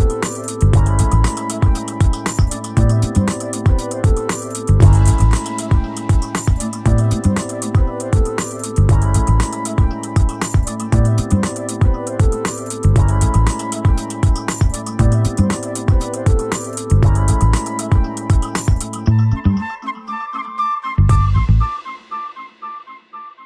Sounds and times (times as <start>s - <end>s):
Music: 0.0s - 23.4s.